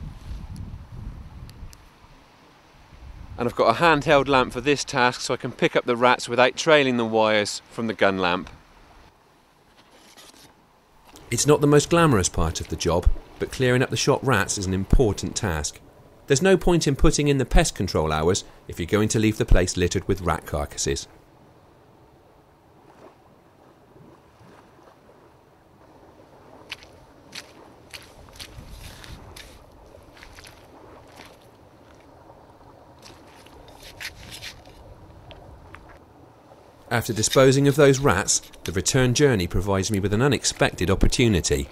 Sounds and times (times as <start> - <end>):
Outside, rural or natural: 0.0 - 41.7
Speech: 3.4 - 8.5, 11.3 - 21.1, 36.9 - 41.7.